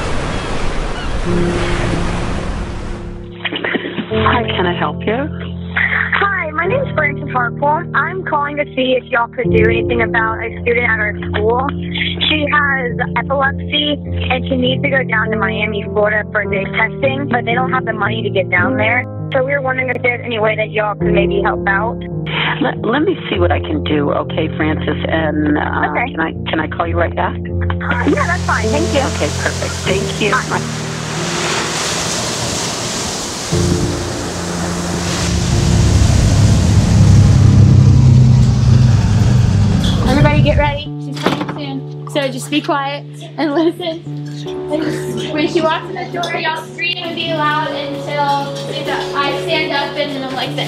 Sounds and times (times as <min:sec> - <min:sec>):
Music: 0:01.2 - 0:50.6
Speech: 0:03.5 - 0:30.6, 0:39.9 - 0:50.6.